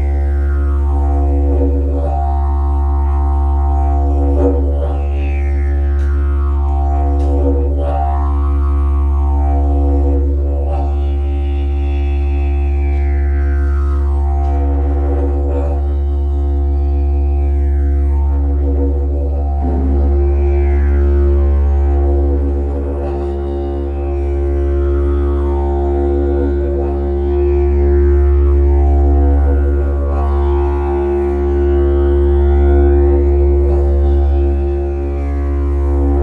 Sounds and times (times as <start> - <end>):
Didgeridoo: 0.0 - 36.2.